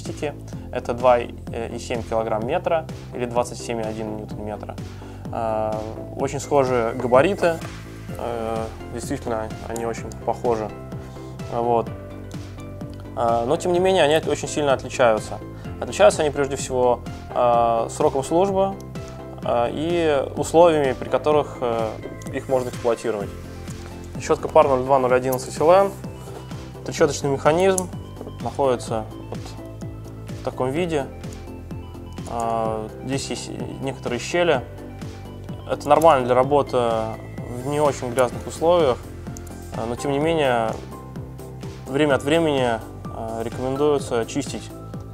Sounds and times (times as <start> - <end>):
Speech: 0.0 - 4.8, 5.4 - 7.6, 8.2 - 10.7, 11.5 - 11.9, 13.2 - 18.8, 19.4 - 23.3, 24.2 - 26.0, 26.9 - 29.6, 30.4 - 31.1, 32.3 - 34.6, 35.7 - 39.0, 39.8 - 40.8, 41.9 - 44.7
Music: 0.0 - 45.1.